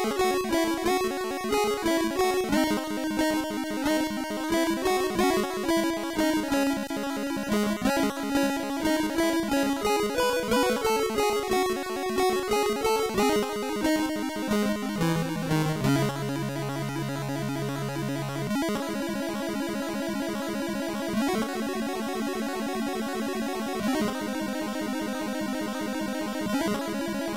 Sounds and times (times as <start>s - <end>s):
Video game music: 0.0s - 24.4s.